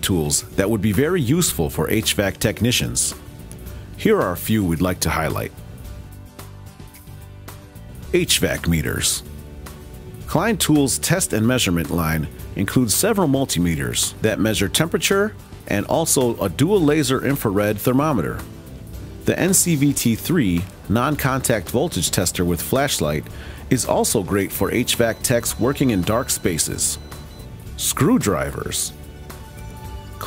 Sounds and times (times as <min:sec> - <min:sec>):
Speech: 0:00.0 - 0:03.2, 0:04.0 - 0:05.5, 0:08.1 - 0:09.3, 0:10.3 - 0:18.4, 0:19.3 - 0:27.0, 0:27.8 - 0:29.0
Music: 0:00.0 - 0:30.2.